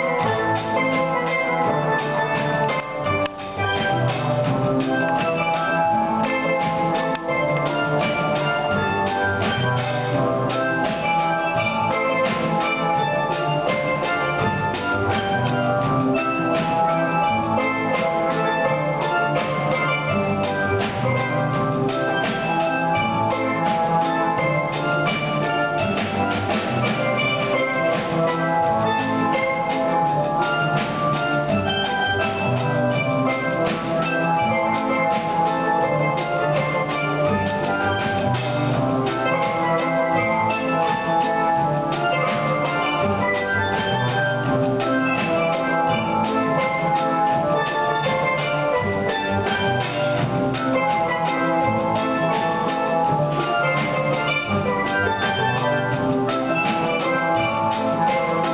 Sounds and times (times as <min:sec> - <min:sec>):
Musical instrument: 0:00.0 - 0:58.5.